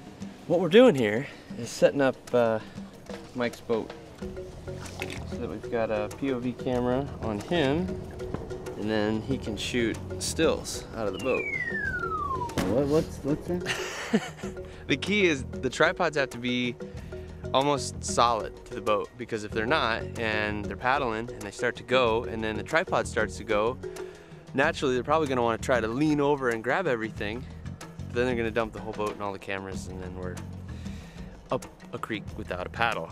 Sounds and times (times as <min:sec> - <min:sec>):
Music: 0:00.0 - 0:33.1
Speech: 0:00.5 - 0:02.6, 0:03.4 - 0:03.9, 0:05.3 - 0:07.9, 0:08.8 - 0:11.4, 0:14.9 - 0:16.8, 0:17.6 - 0:23.8, 0:24.6 - 0:27.4, 0:28.1 - 0:30.4, 0:31.5 - 0:33.1.